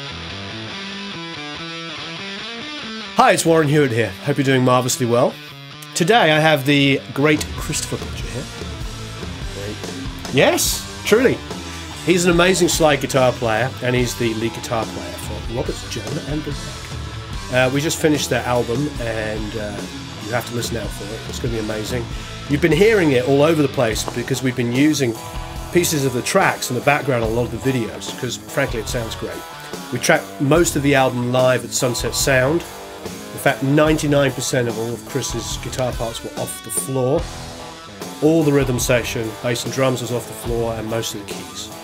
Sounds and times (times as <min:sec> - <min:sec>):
Music: 0:00.0 - 0:41.8
Speech: 0:03.2 - 0:08.5, 0:09.5 - 0:11.4, 0:12.0 - 0:16.9, 0:17.5 - 0:32.7, 0:33.3 - 0:37.3, 0:38.2 - 0:41.8.